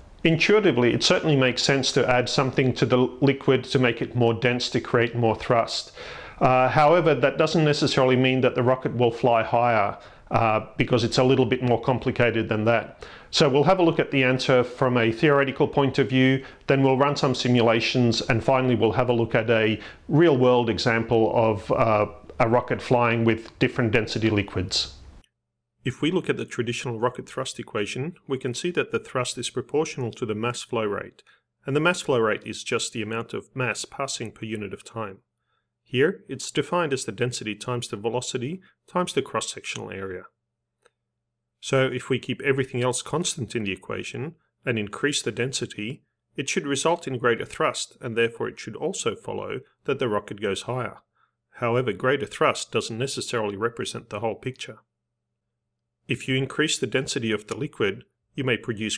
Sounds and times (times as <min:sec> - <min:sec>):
Speech: 0:00.2 - 0:25.0, 0:25.9 - 0:35.2, 0:35.9 - 0:40.3, 0:41.6 - 0:51.0, 0:51.6 - 0:54.8, 0:56.1 - 0:58.9.